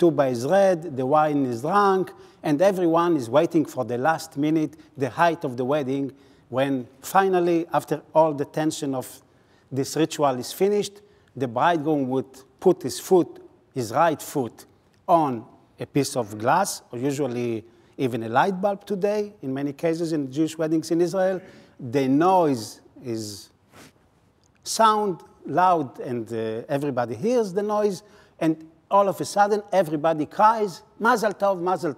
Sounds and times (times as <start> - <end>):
Speech: 0.0 - 23.5, 24.6 - 31.9.